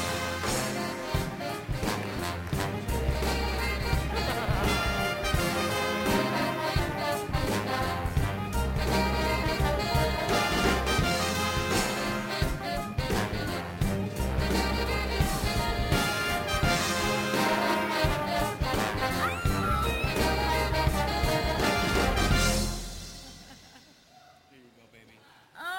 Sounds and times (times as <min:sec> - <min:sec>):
Music: 0:00.0 - 0:24.1.